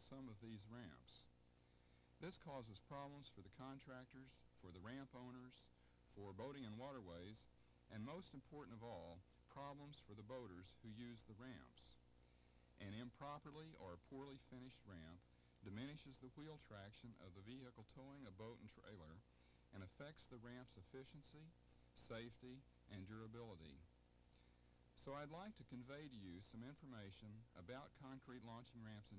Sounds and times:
Speech: 0.0s - 1.3s, 2.2s - 12.0s, 12.8s - 23.9s, 25.0s - 29.1s.

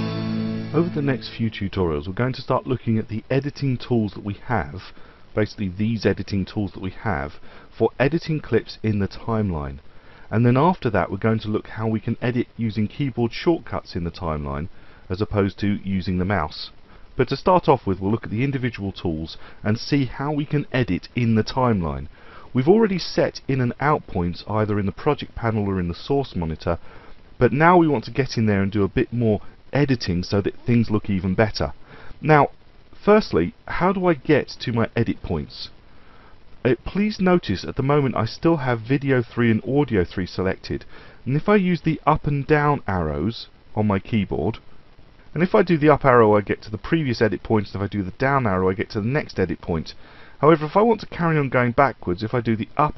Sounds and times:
Speech: 0.7s - 26.8s, 27.4s - 35.8s, 36.6s - 44.6s, 45.3s - 52.9s.

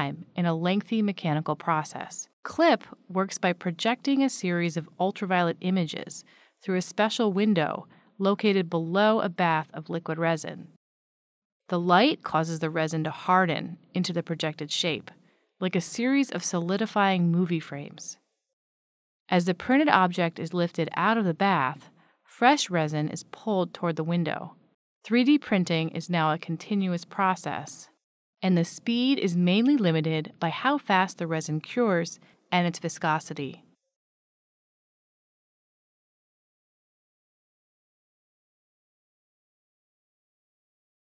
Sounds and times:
Speech: 0.0s - 10.8s, 11.7s - 18.2s, 19.3s - 24.5s, 25.1s - 33.6s.

